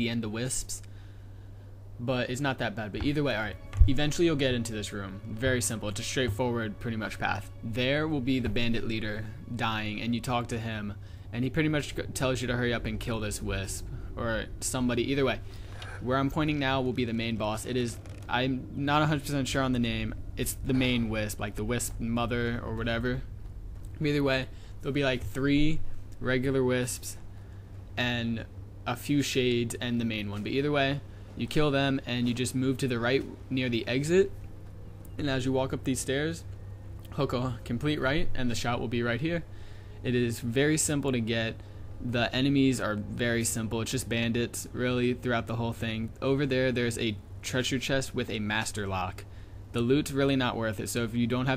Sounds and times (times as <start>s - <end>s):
Speech: 0.0s - 0.9s, 2.0s - 23.3s, 24.0s - 27.2s, 28.0s - 34.3s, 35.2s - 36.5s, 37.1s - 51.5s.